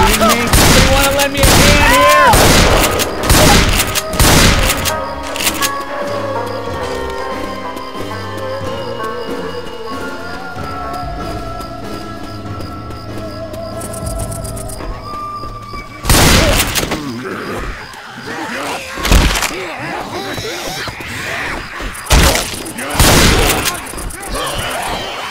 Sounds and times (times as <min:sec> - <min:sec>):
Speech: 0:00.0 - 0:02.4, 0:19.5 - 0:20.8.